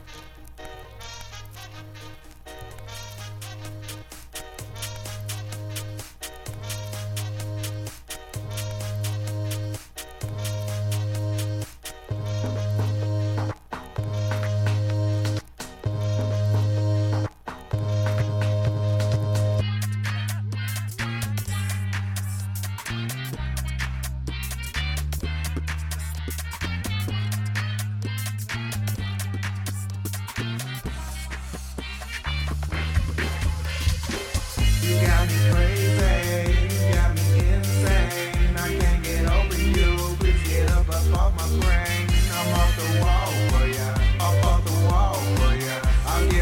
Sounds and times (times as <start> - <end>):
Music: 0.0 - 46.4.